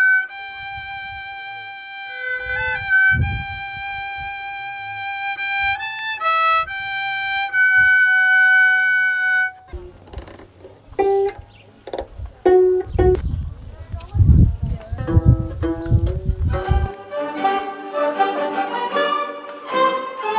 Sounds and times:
Music: 0.0s - 9.6s, 15.0s - 20.3s
Speech: 13.4s - 15.4s.

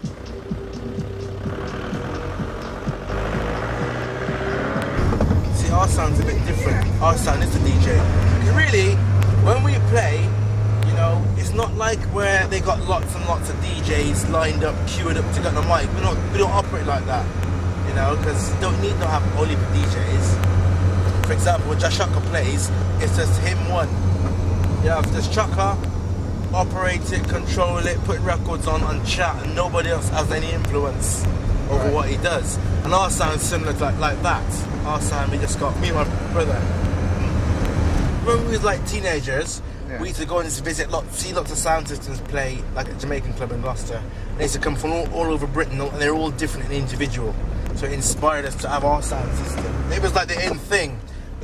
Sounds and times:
Speech: 5.6s - 17.3s, 17.9s - 20.4s, 21.2s - 23.9s, 24.8s - 25.8s, 26.5s - 36.7s, 38.2s - 51.4s.

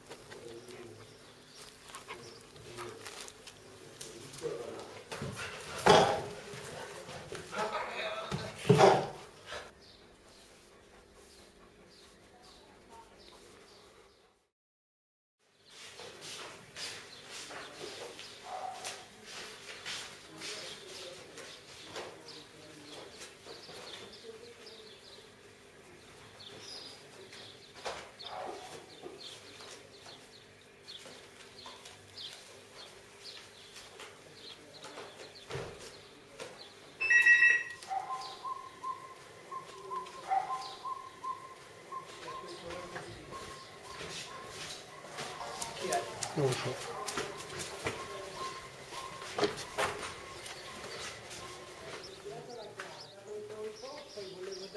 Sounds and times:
Animal: 0.1s - 7.0s, 37.0s - 52.9s.

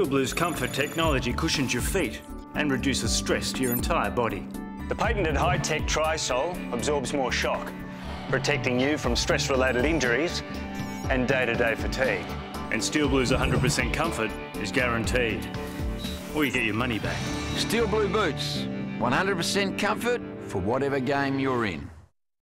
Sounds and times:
Music: 0.0s - 22.1s
Speech: 16.3s - 22.0s.

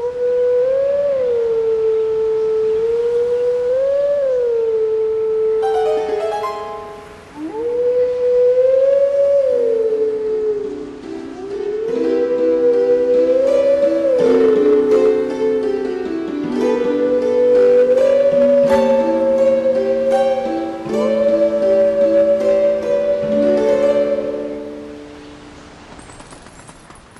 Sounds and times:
Music: 5.6s - 7.2s, 10.8s - 25.4s.

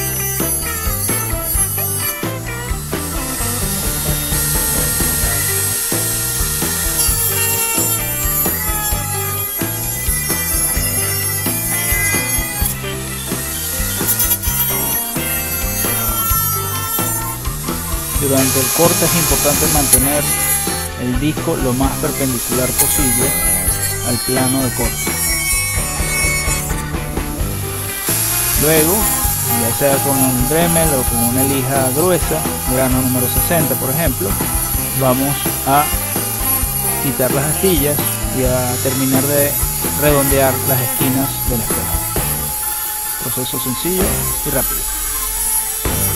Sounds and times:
Music: 0.0s - 46.1s
Speech: 18.2s - 25.0s, 28.6s - 36.0s, 37.0s - 42.1s, 43.2s - 44.8s.

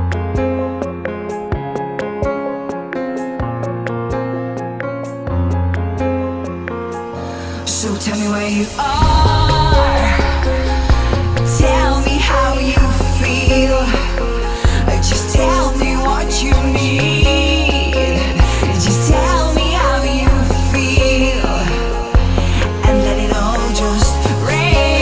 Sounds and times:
Music: 0.0s - 25.0s.

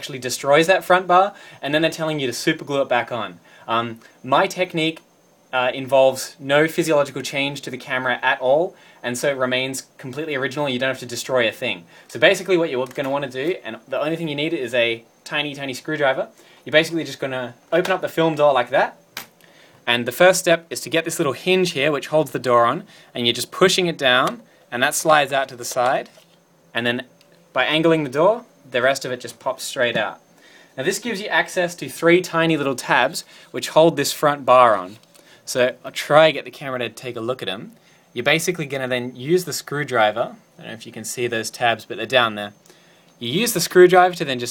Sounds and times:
Speech: 0.0s - 19.0s, 19.8s - 30.2s, 30.8s - 42.6s, 43.2s - 44.5s.

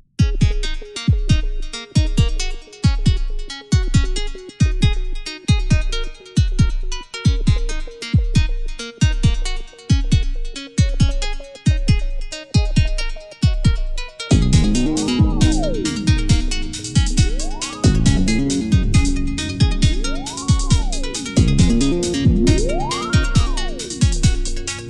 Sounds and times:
Music: 0.0s - 24.8s.

